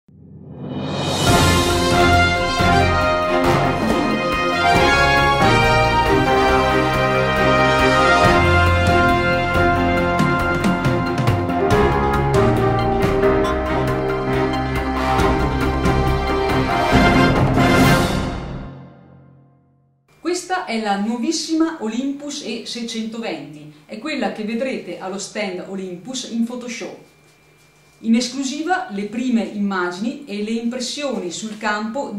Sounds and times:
Theme music: 0:00.1 - 0:19.6.

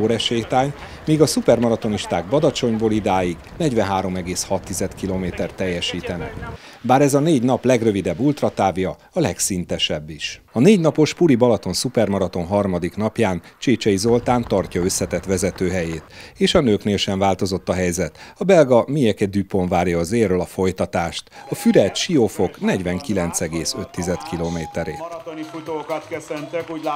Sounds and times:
Run: 0:00.0 - 0:06.8, 0:11.4 - 0:16.7, 0:21.4 - 0:26.9
Outside, rural or natural: 0:00.0 - 0:09.5, 0:10.5 - 0:18.4
Speech: 0:00.0 - 0:26.9.

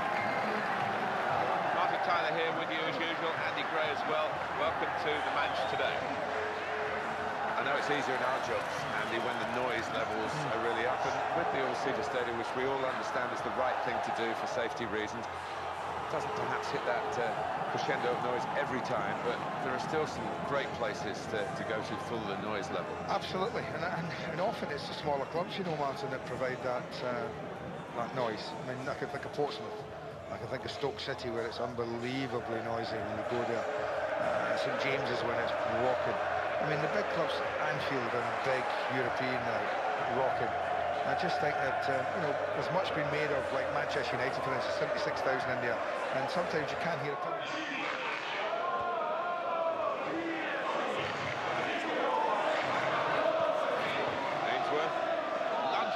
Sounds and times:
Speech: 0:01.7 - 0:06.0, 0:07.6 - 0:15.3, 0:16.1 - 0:33.7, 0:34.4 - 0:48.1, 0:54.4 - 0:55.0.

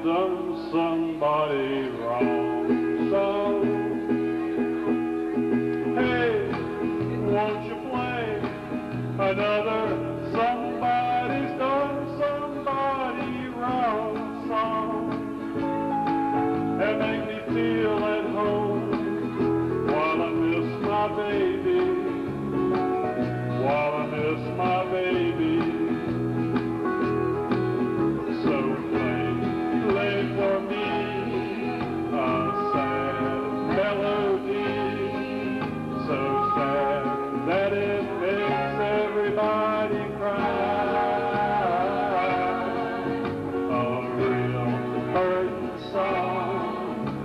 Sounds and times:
Male singing: 0:00.0 - 0:03.9, 0:06.0 - 0:08.6, 0:09.2 - 0:15.2, 0:16.8 - 0:19.1, 0:19.8 - 0:22.3, 0:23.5 - 0:26.2, 0:28.3 - 0:47.2
Music: 0:00.0 - 0:47.2.

